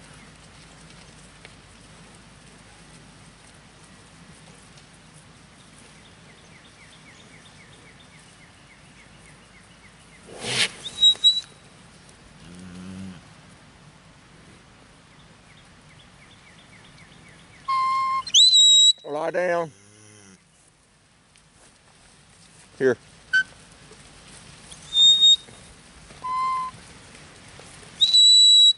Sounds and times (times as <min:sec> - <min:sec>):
Speech: 0:19.0 - 0:19.8, 0:22.8 - 0:23.0.